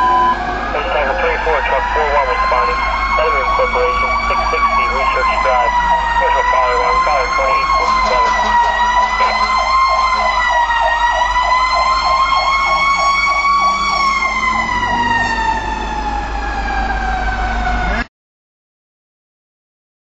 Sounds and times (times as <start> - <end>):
Truck: 0.0 - 18.1
Accelerating, revving, vroom: 12.0 - 16.1.